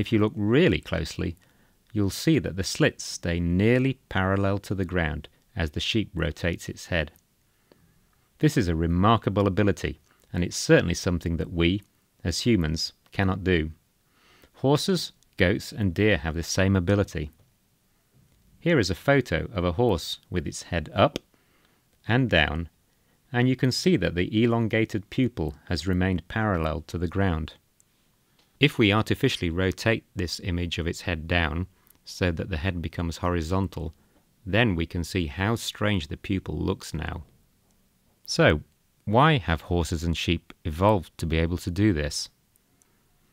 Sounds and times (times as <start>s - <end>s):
Speech: 0.0s - 7.2s, 8.4s - 13.8s, 14.6s - 17.4s, 18.6s - 21.3s, 22.0s - 27.6s, 28.6s - 37.3s, 38.3s - 42.4s.